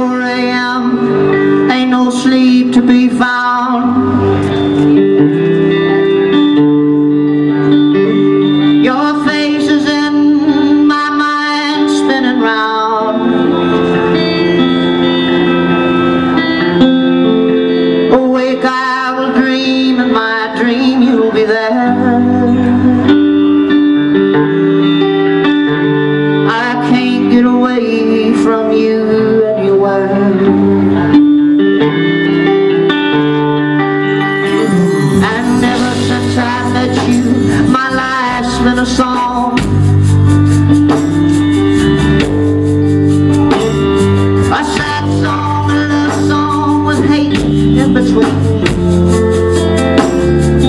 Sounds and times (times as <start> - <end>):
Music: 0.0 - 50.6.